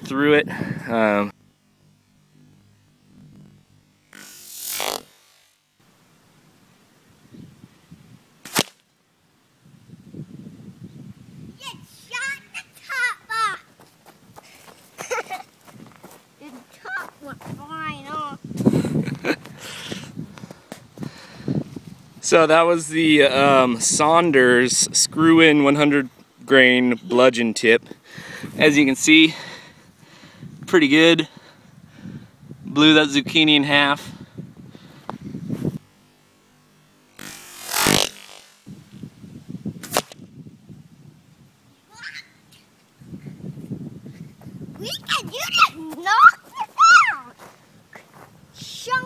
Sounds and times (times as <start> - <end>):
Walk, footsteps: 13.8 - 17.6, 47.4 - 48.3.